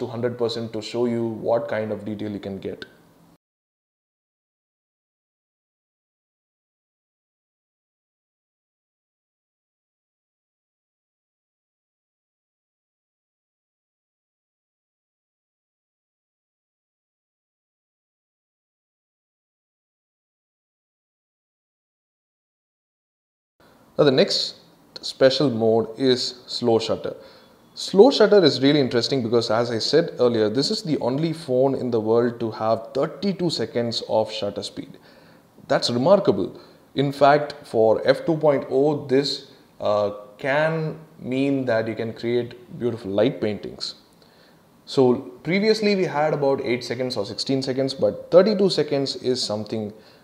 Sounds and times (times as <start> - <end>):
Speech: 0.0 - 2.9, 24.0 - 27.2, 27.8 - 35.0, 35.7 - 44.0, 44.9 - 50.0.